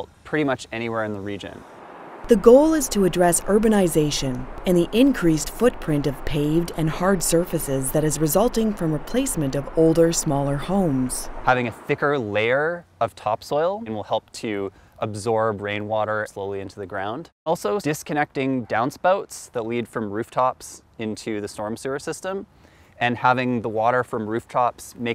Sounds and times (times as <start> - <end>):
Speech: 0.0 - 1.6, 2.3 - 25.1.